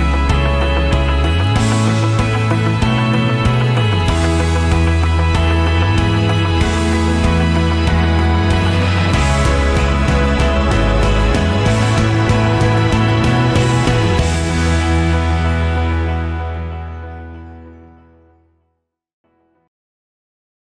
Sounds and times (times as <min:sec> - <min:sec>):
Music: 0:00.0 - 0:19.7.